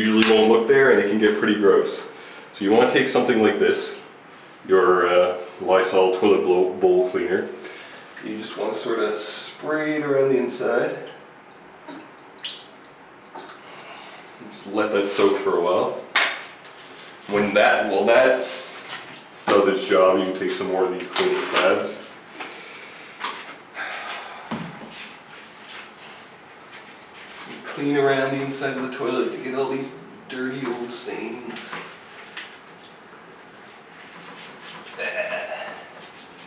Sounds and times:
Speech: 0:00.0 - 0:07.6, 0:08.2 - 0:11.2, 0:14.4 - 0:16.1, 0:17.3 - 0:18.6, 0:19.5 - 0:22.1, 0:27.5 - 0:31.9.

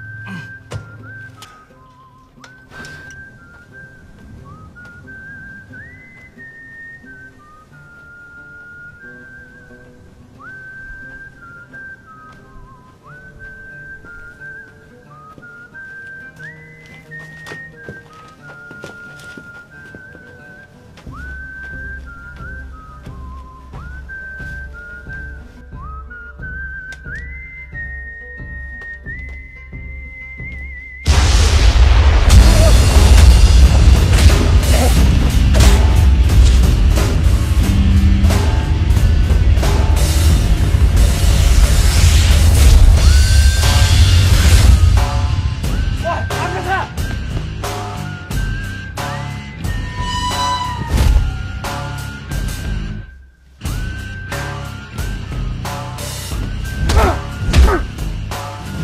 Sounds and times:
Music: 0:00.0 - 0:58.8.

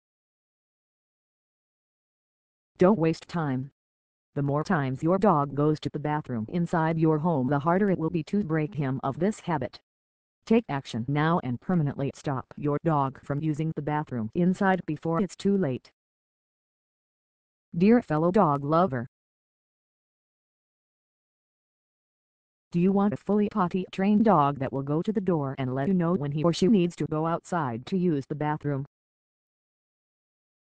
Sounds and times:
Speech: 0:02.8 - 0:03.8, 0:04.4 - 0:09.8, 0:10.5 - 0:15.9, 0:17.8 - 0:19.1, 0:22.8 - 0:28.9.

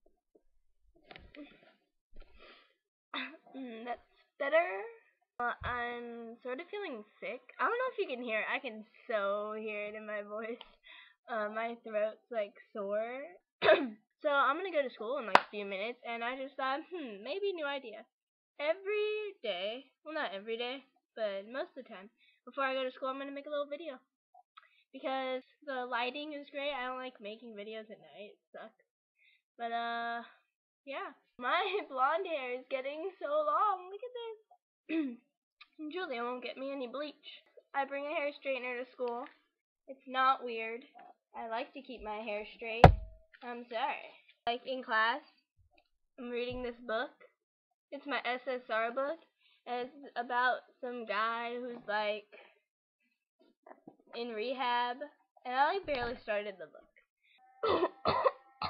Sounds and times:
Speech: 0:03.2 - 0:24.0, 0:24.9 - 0:28.8, 0:29.6 - 0:39.3, 0:39.9 - 0:45.4, 0:46.2 - 0:47.3, 0:47.9 - 0:52.6, 0:53.7 - 0:56.9.

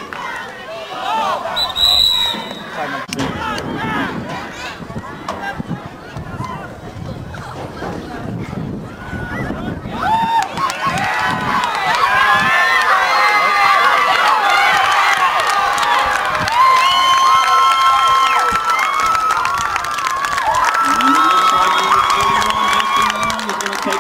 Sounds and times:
Speech: 0:20.8 - 0:24.0.

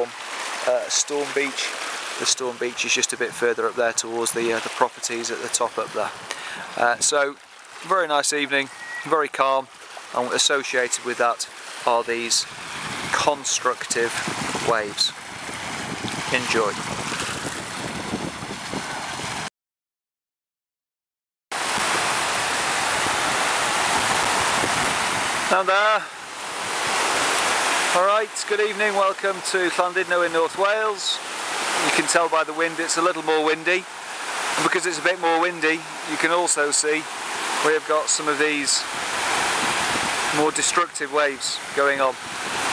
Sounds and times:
Speech: 0:00.0 - 0:06.1, 0:06.8 - 0:12.5, 0:13.1 - 0:15.1, 0:16.3 - 0:16.8, 0:25.5 - 0:26.1, 0:27.9 - 0:31.2, 0:31.8 - 0:33.9, 0:34.6 - 0:38.9, 0:40.3 - 0:42.2
Waves, surf: 0:00.0 - 0:19.5, 0:21.5 - 0:42.7.

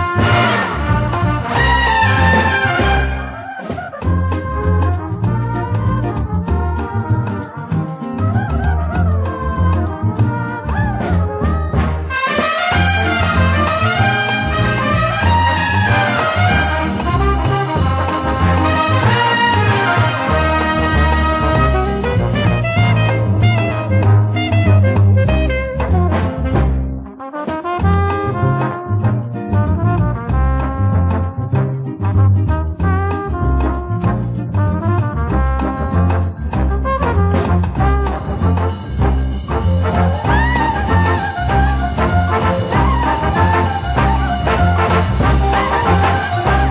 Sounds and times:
Orchestra: 0:00.0 - 0:46.7.

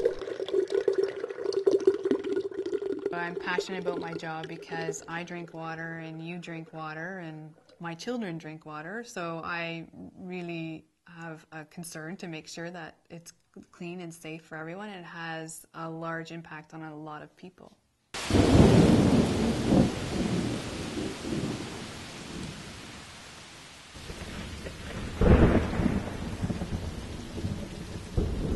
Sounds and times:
Rain: 0:00.0 - 0:06.7, 0:18.2 - 0:28.5
Thunder: 0:18.2 - 0:22.8, 0:24.0 - 0:28.5
Rustle: 0:18.2 - 0:28.5.

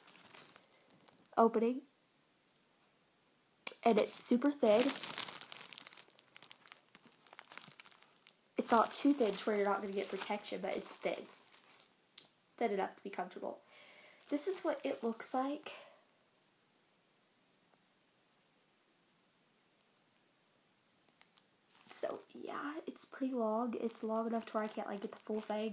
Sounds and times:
Inside, small room: 0:00.0 - 0:25.7
Speech: 0:01.4 - 0:01.9, 0:03.7 - 0:05.0, 0:08.6 - 0:11.3, 0:12.6 - 0:13.6, 0:14.3 - 0:16.0, 0:21.9 - 0:25.7.

